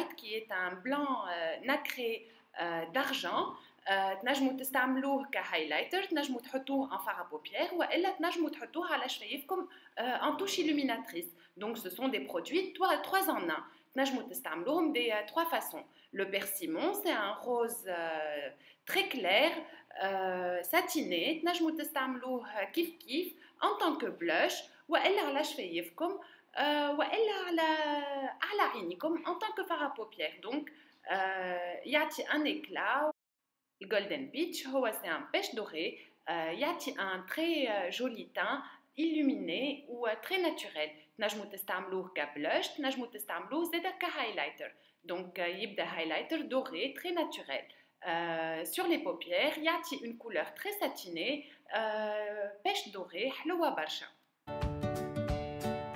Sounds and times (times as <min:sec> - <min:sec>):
Speech: 0:00.0 - 0:33.2, 0:33.8 - 0:54.2.